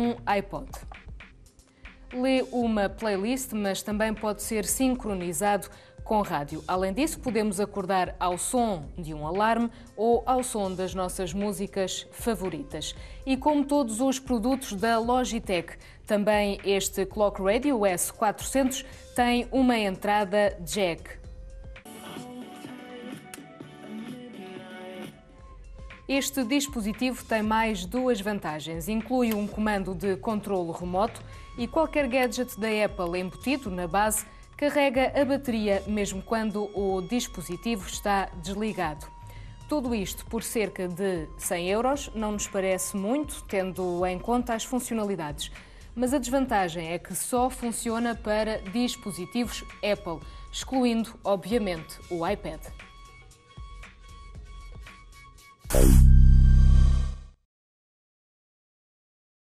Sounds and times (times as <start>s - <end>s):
Speech: 0.0s - 0.9s, 2.2s - 21.2s, 26.1s - 39.1s, 39.7s - 52.7s.